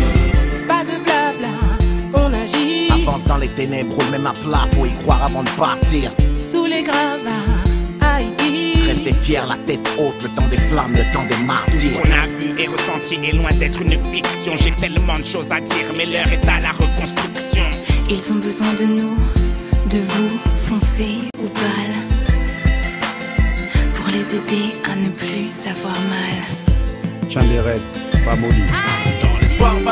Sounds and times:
Music: 0.0 - 29.9.

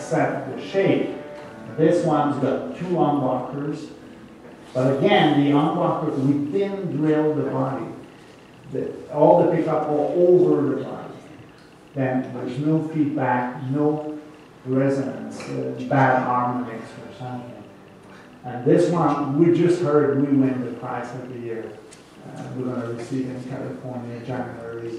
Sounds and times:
Speech: 0.0 - 1.2, 1.8 - 4.0, 4.7 - 8.0, 8.7 - 11.4, 12.0 - 17.7, 18.4 - 24.9
Strum: 0.0 - 24.9.

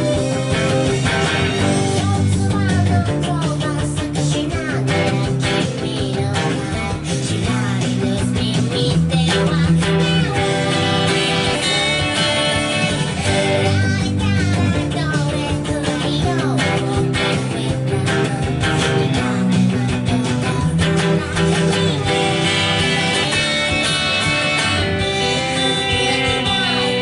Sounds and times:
Electric guitar: 0.0 - 27.0.

